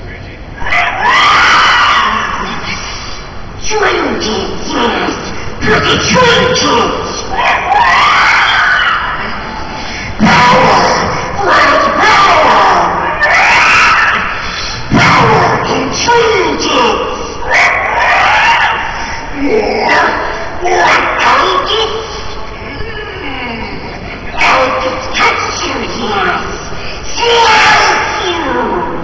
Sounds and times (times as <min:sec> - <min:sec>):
Speech: 0:03.6 - 0:07.4, 0:10.2 - 0:13.3, 0:15.0 - 0:17.3, 0:19.4 - 0:29.0.